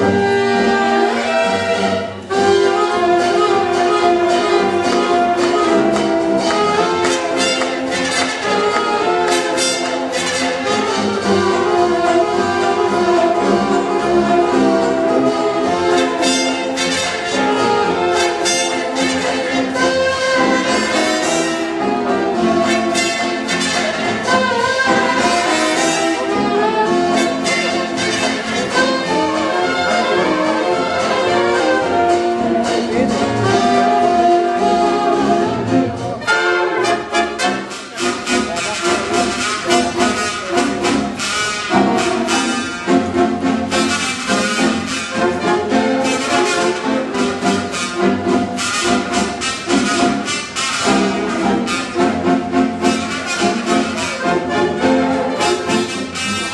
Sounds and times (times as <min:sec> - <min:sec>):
Orchestra: 0:00.0 - 0:56.5.